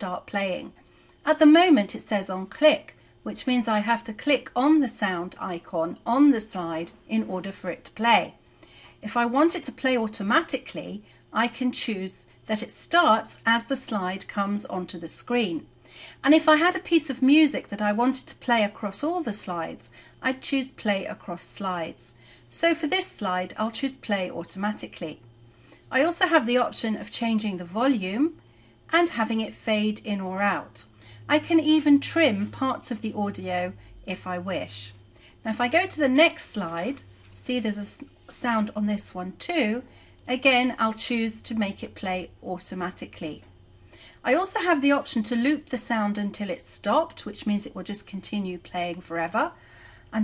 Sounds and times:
Speech: 0.0s - 8.4s, 9.0s - 25.2s, 25.9s - 43.5s, 44.2s - 50.2s.

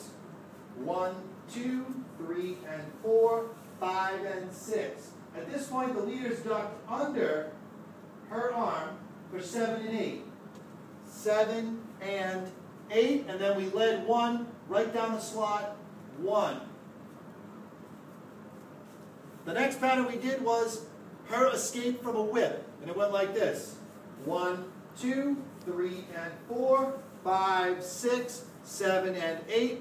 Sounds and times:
Speech: 0.8s - 7.6s, 8.3s - 10.3s, 11.1s - 16.7s, 19.4s - 29.8s.

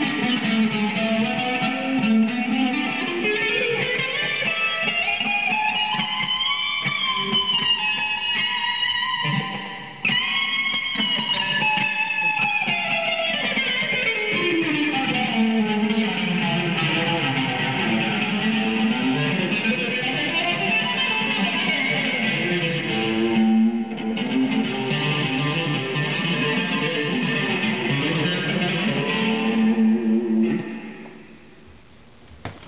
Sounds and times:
Tapping (guitar technique): 0.0s - 31.4s.

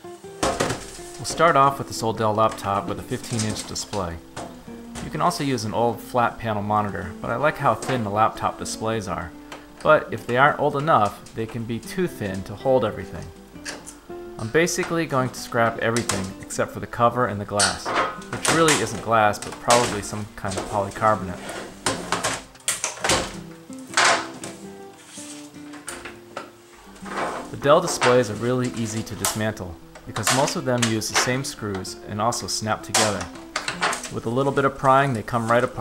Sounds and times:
Inside, small room: 0.0s - 35.8s
Music: 0.0s - 35.8s
Speech: 1.2s - 4.2s, 5.0s - 13.3s, 14.4s - 21.5s, 27.5s - 33.3s, 34.1s - 35.8s.

